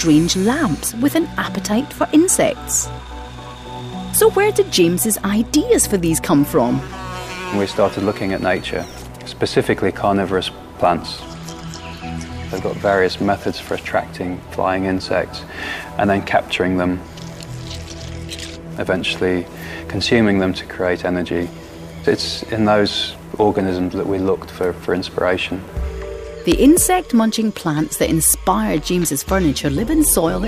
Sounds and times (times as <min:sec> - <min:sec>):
Music: 0:00.0 - 0:30.4.